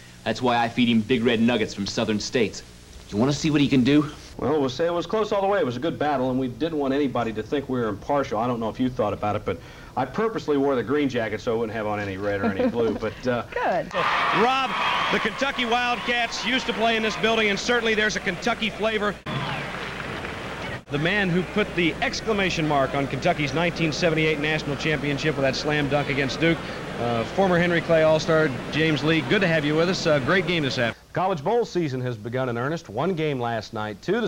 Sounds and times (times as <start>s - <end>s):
Speech: 0.2s - 19.2s, 20.9s - 34.2s.